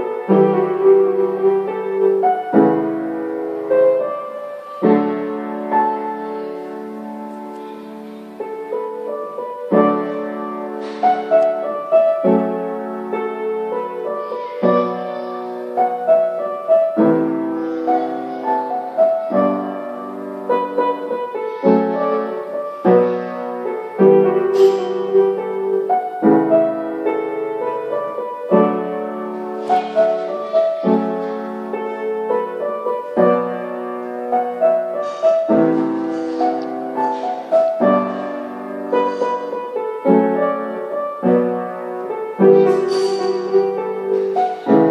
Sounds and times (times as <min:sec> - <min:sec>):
Piano: 0:00.0 - 0:44.9.